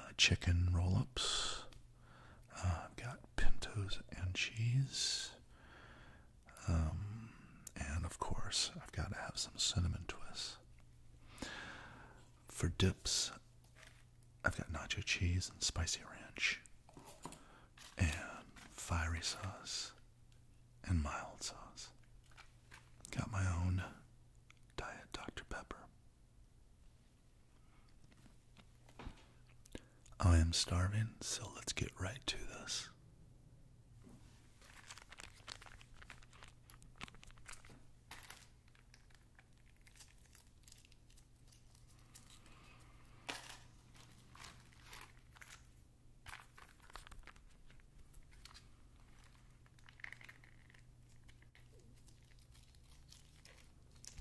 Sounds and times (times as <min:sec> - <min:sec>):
Speech: 0:00.0 - 0:01.7, 0:02.5 - 0:05.4, 0:06.5 - 0:10.6, 0:12.5 - 0:13.4, 0:14.5 - 0:16.6, 0:18.0 - 0:20.0, 0:20.8 - 0:22.0, 0:23.1 - 0:24.0, 0:30.2 - 0:33.0.